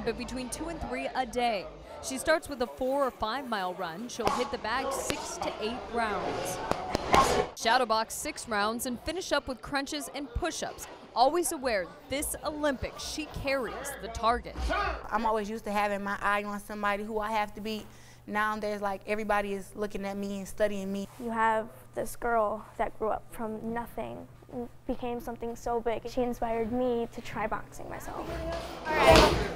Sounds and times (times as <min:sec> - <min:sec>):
Female speech, woman speaking: 0:00.0 - 0:06.6, 0:07.6 - 0:29.5.